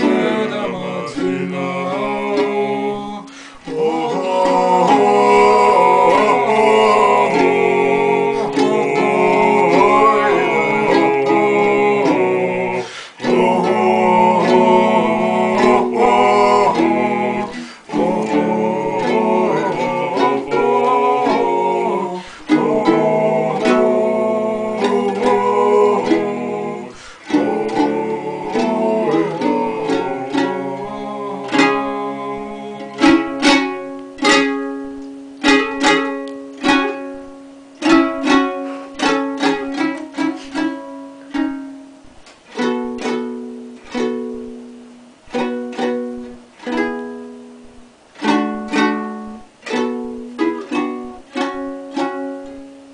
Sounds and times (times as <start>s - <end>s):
Ukulele: 0.0s - 52.9s.